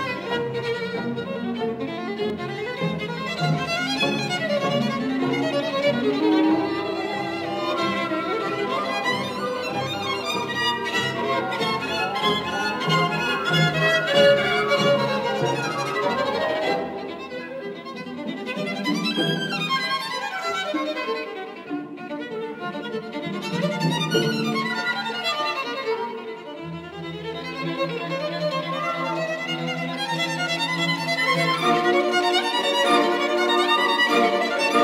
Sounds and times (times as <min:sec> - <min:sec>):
Violin, fiddle: 0:00.0 - 0:34.8.